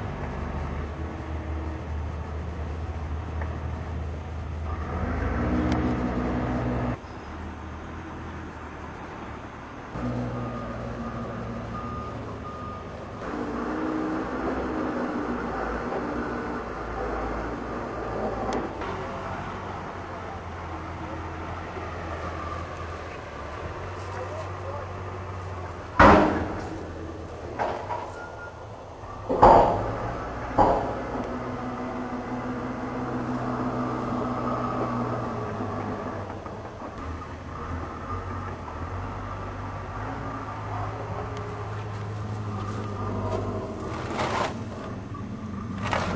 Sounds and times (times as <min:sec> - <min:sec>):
Car: 0:00.0 - 0:46.1.